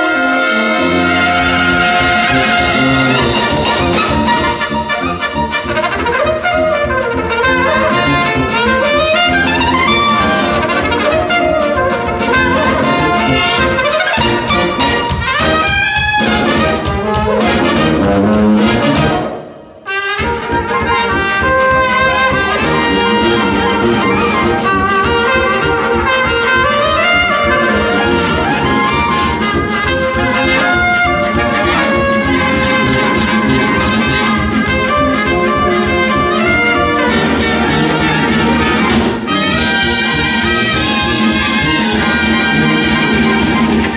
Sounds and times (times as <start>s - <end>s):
Brass instrument: 0.0s - 43.9s.